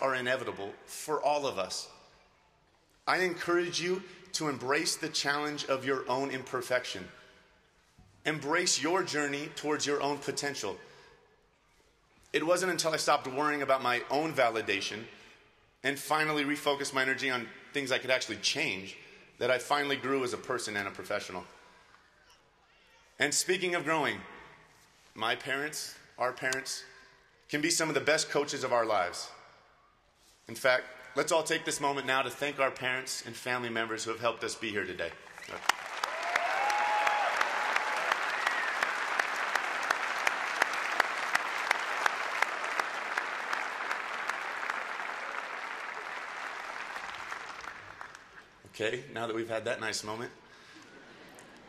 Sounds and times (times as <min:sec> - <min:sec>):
Speech: 0:00.0 - 0:02.0, 0:03.0 - 0:07.1, 0:08.2 - 0:10.8, 0:12.4 - 0:15.1, 0:15.8 - 0:21.6, 0:22.7 - 0:24.4, 0:25.2 - 0:29.4, 0:30.5 - 0:35.6, 0:48.7 - 0:50.4
Applause: 0:35.3 - 0:48.4.